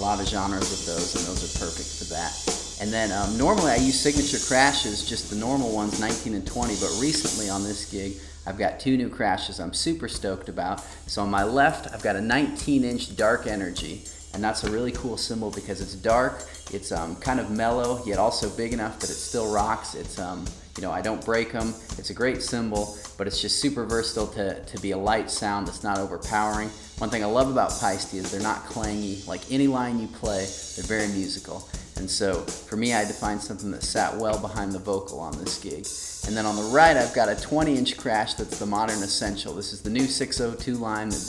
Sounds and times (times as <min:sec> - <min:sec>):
Snare drum: 0:00.0 - 0:07.9, 0:12.6 - 0:15.6, 0:25.1 - 0:41.2
Hi-hat: 0:00.0 - 0:08.8, 0:09.6 - 0:41.2
Drum kit: 0:00.0 - 0:41.2
Speech: 0:00.0 - 0:41.2.